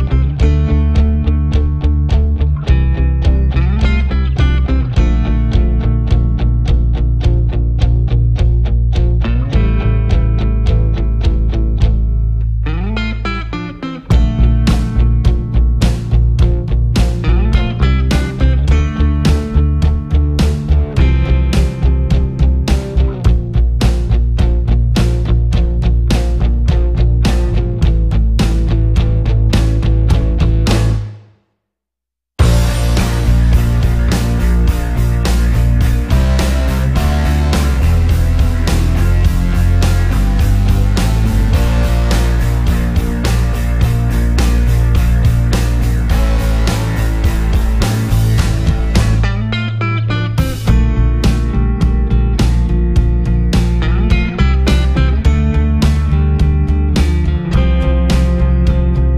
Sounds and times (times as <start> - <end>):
Bass guitar: 0.0 - 31.3, 32.4 - 59.1.